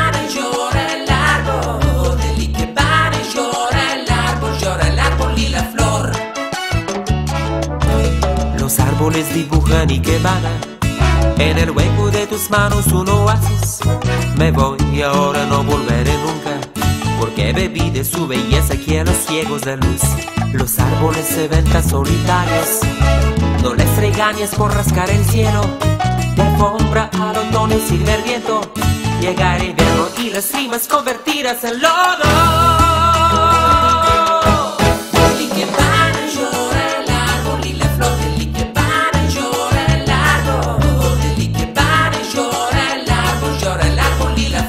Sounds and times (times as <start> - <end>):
Music: 0.0 - 44.6.